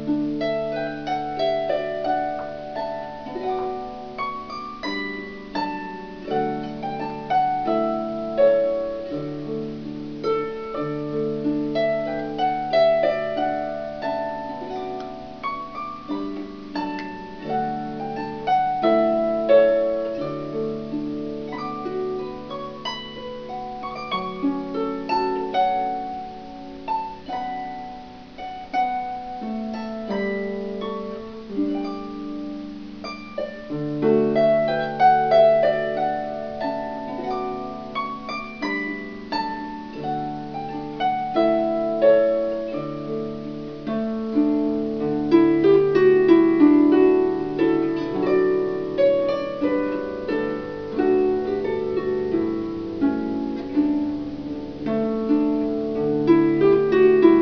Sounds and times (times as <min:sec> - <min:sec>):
Harp: 0:00.0 - 0:57.4
Plucked string instrument: 0:00.0 - 0:57.4.